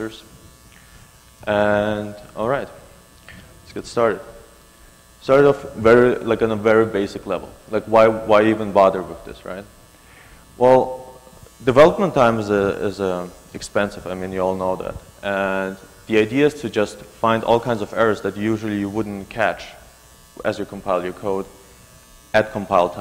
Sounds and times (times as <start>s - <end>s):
Speech: 0.0s - 0.3s, 1.4s - 2.8s, 3.6s - 4.4s, 5.2s - 9.7s, 10.6s - 19.8s, 20.4s - 21.6s, 22.3s - 23.0s.